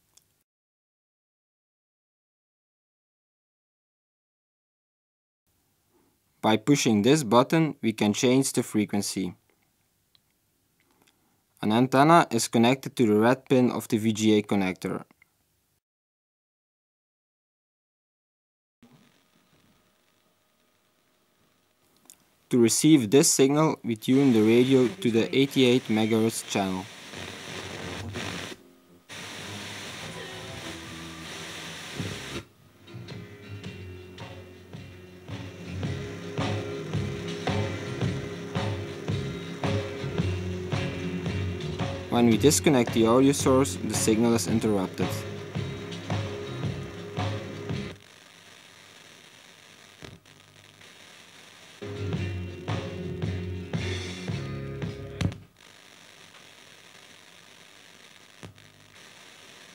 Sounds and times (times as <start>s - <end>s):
Speech: 6.4s - 9.4s, 11.6s - 15.2s, 22.5s - 26.9s, 42.1s - 45.3s.